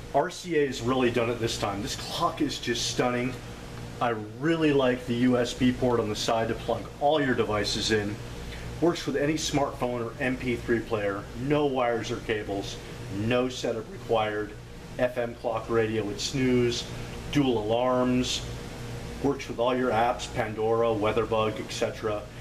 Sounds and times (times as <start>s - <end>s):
Speech: 0.1s - 3.4s, 4.0s - 8.2s, 8.8s - 18.5s, 19.2s - 22.4s.